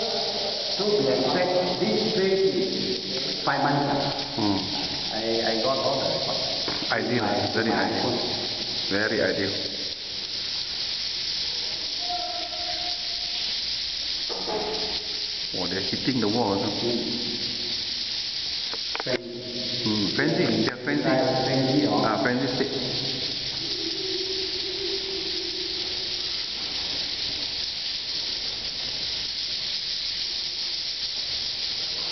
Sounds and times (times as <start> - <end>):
Speech: 0.0 - 2.8, 3.4 - 8.3, 8.9 - 9.7, 15.5 - 17.2, 19.0 - 22.8.